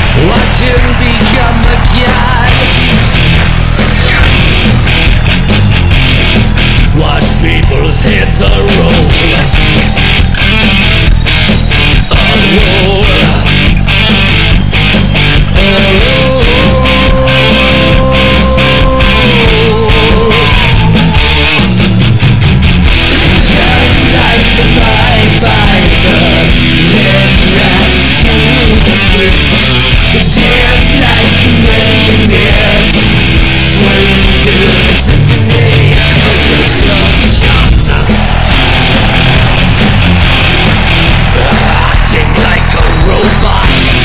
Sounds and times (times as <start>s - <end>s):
Electric guitar: 0.0s - 44.0s.